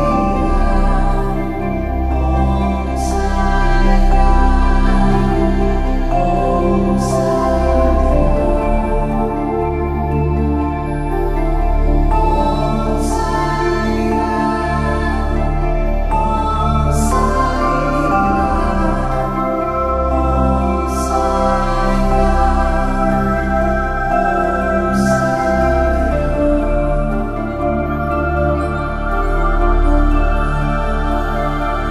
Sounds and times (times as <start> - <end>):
New-age music: 0.0 - 31.9.